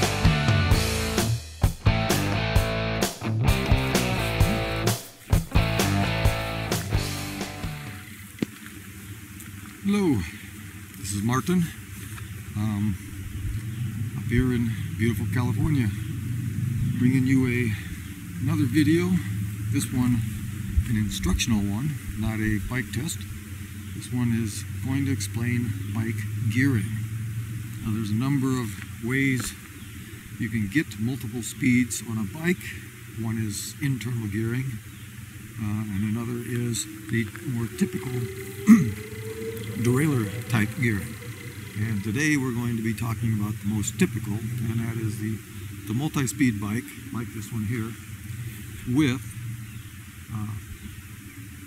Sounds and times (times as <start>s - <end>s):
Speech: 9.8s - 10.4s, 11.0s - 11.8s, 12.6s - 13.0s, 14.2s - 16.0s, 17.0s - 17.8s, 18.4s - 20.2s, 20.9s - 23.2s, 24.0s - 27.0s, 27.8s - 29.6s, 30.4s - 34.8s, 35.6s - 39.0s, 39.8s - 41.2s, 41.8s - 48.0s, 48.8s - 49.3s, 50.3s - 50.6s.